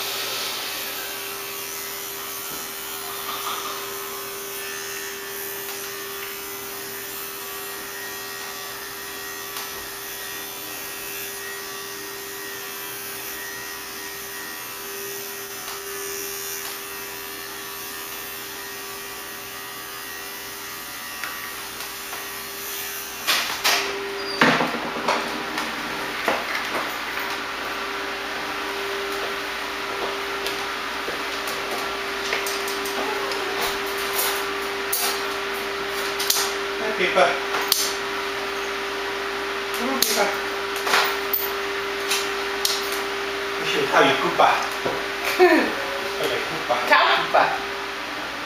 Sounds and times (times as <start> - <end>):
Electric toothbrush: 0.0 - 48.4.